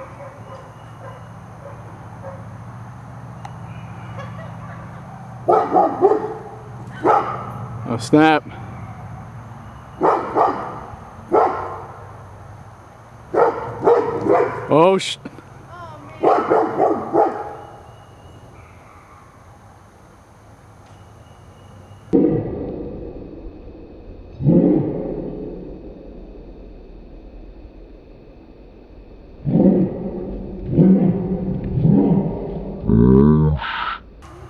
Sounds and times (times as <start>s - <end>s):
Bow-wow: 5.5s - 7.5s, 10.0s - 11.9s, 13.4s - 14.7s, 16.2s - 17.7s
Speech: 7.9s - 8.5s, 14.7s - 16.3s.